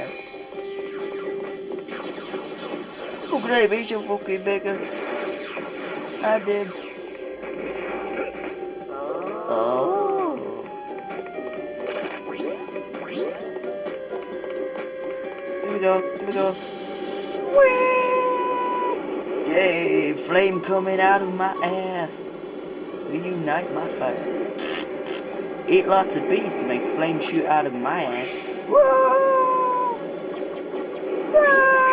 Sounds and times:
Music: 0.0 - 23.6
Speech: 3.3 - 4.8, 6.2 - 6.7, 15.6 - 16.6, 19.5 - 22.3, 23.1 - 24.3, 25.7 - 29.7.

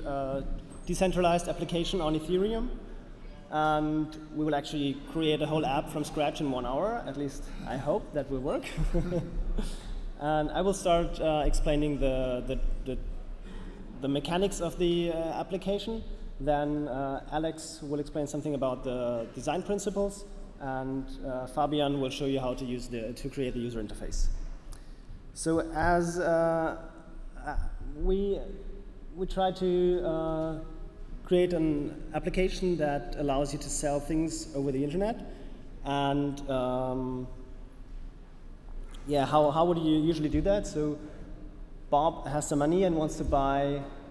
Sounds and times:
Speech: 0.0 - 2.8, 3.5 - 9.2, 10.2 - 13.1, 13.9 - 24.4, 25.4 - 37.4, 38.9 - 41.1, 41.9 - 44.1.

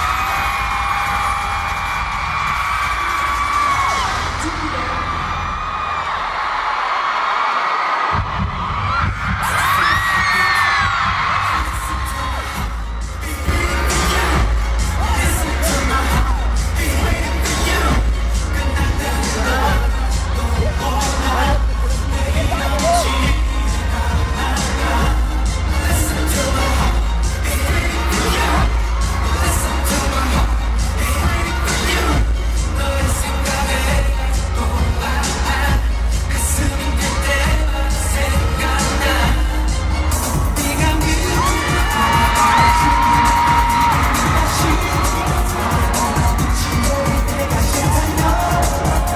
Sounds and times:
Music: 0.0 - 49.1.

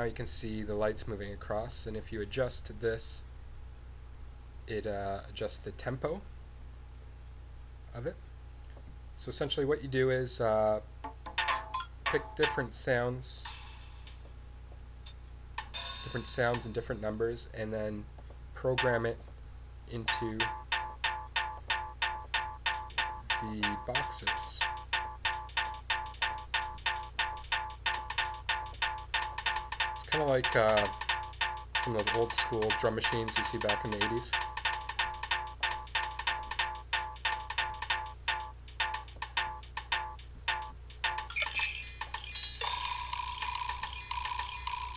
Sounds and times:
Speech: 0.0 - 3.3, 4.7 - 6.3, 7.9 - 8.2, 9.2 - 10.9, 12.1 - 13.5, 16.1 - 19.2, 19.9 - 20.5, 23.4 - 24.6, 30.1 - 30.9, 31.8 - 34.4
Drum machine: 15.6 - 16.8, 18.8 - 19.0, 20.0 - 42.8.

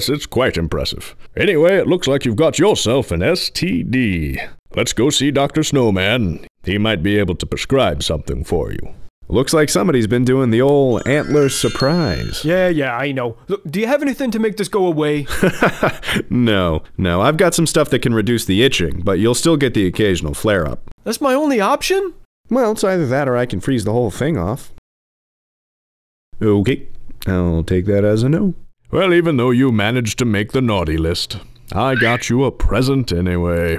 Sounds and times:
Speech: 0.0 - 15.3, 16.2 - 24.8, 26.4 - 33.7.

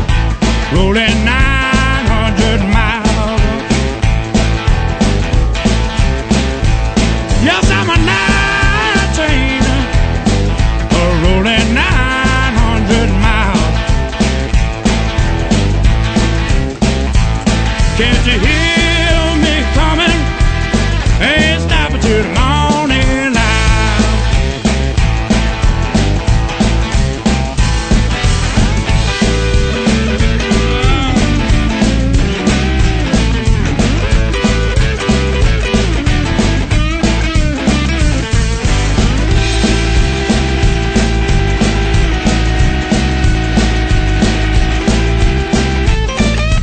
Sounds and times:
Guitar: 0.0 - 46.6.

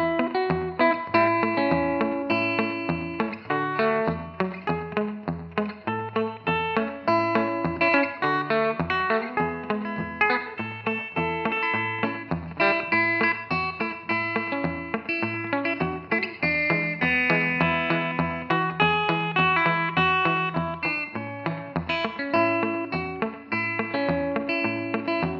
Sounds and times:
Bass guitar: 0.0 - 25.3
Electric guitar: 0.0 - 25.3
Strum: 0.0 - 25.3.

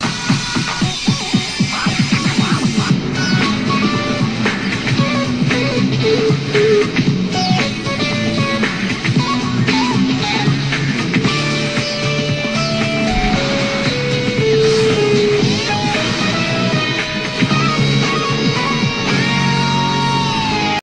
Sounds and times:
Background music: 0.0 - 20.8.

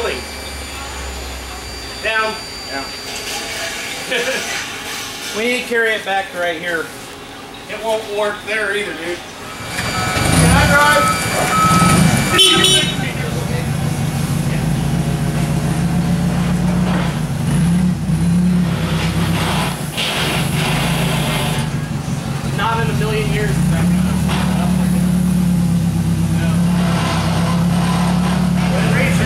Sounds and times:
Speech: 5.3 - 6.9, 7.7 - 9.3, 12.6 - 13.8, 22.6 - 25.2, 28.6 - 29.2.

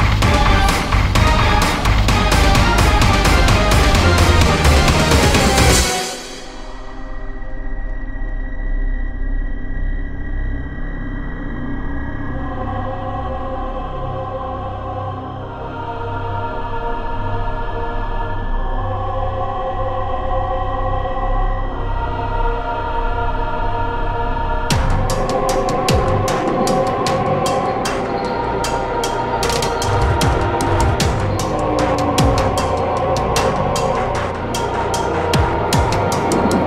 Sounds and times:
Music: 0.0 - 36.6.

